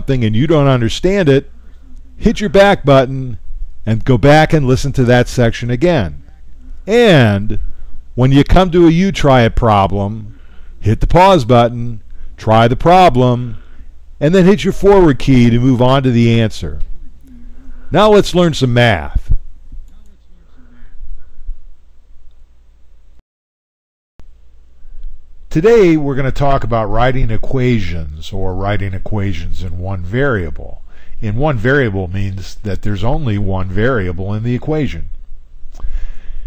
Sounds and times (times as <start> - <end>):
Speech: 0.0 - 7.6, 8.2 - 13.6, 14.2 - 21.0, 25.5 - 35.1.